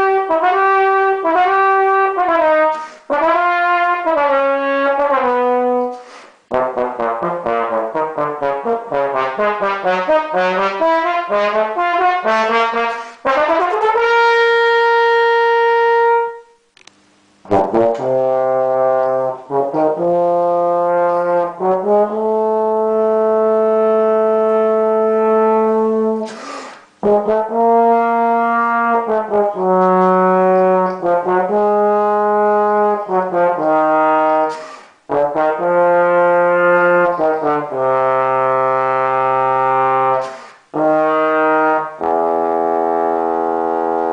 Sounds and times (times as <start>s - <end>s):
Music: 0.0s - 16.7s, 17.4s - 44.1s.